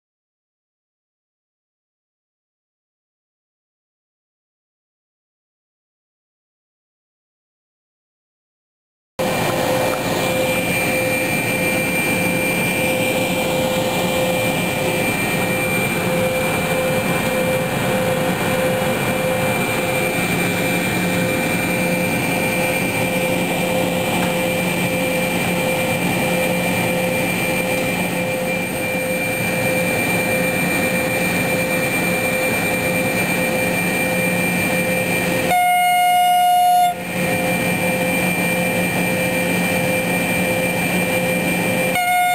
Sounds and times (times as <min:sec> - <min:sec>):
Outside, urban or manmade: 0:09.2 - 0:42.3
Railroad car, train wagon: 0:09.2 - 0:42.3
Train: 0:09.2 - 0:42.3.